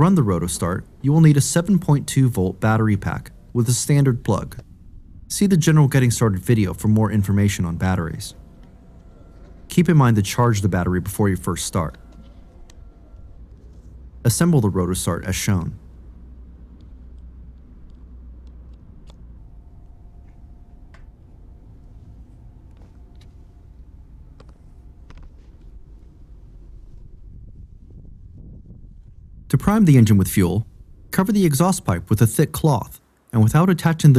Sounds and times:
Speech: 0.0s - 4.6s, 5.3s - 8.4s, 9.7s - 12.0s, 14.2s - 15.8s, 29.5s - 34.1s.

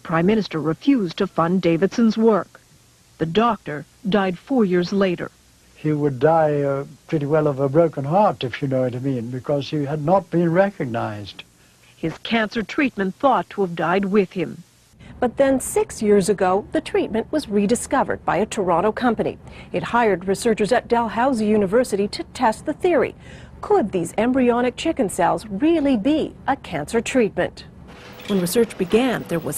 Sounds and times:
Speech: 0.0s - 2.6s, 3.2s - 11.4s, 12.1s - 14.6s, 15.2s - 27.7s, 28.3s - 29.5s.

